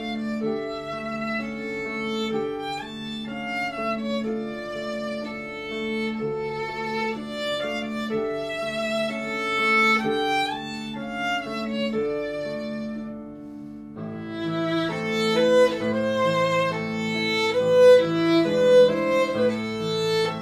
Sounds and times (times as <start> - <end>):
Violin, fiddle: 0.0 - 20.4.